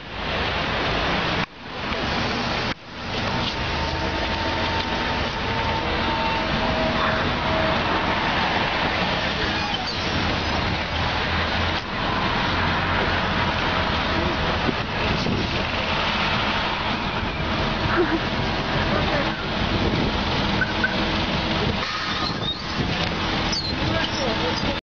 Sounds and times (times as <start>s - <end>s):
Speech: 18.8s - 19.6s, 23.7s - 24.8s.